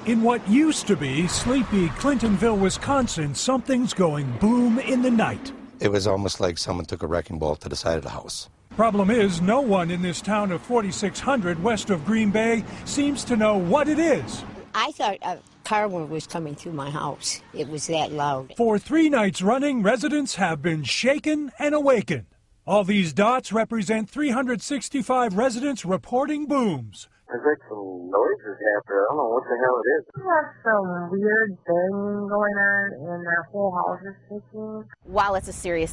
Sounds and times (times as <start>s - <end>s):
Speech: 0.0s - 34.4s, 35.1s - 35.9s.